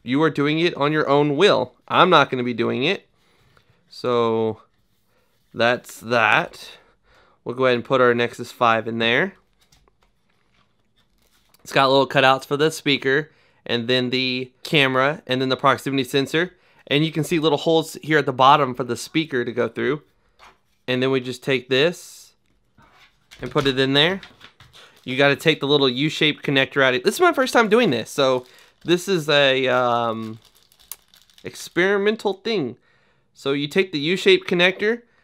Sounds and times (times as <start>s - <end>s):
Speech: 0.0s - 3.0s, 3.9s - 4.7s, 5.6s - 6.8s, 7.5s - 9.4s, 11.6s - 20.1s, 20.9s - 22.4s, 23.4s - 24.3s, 25.1s - 30.4s, 31.4s - 32.8s, 33.4s - 35.0s.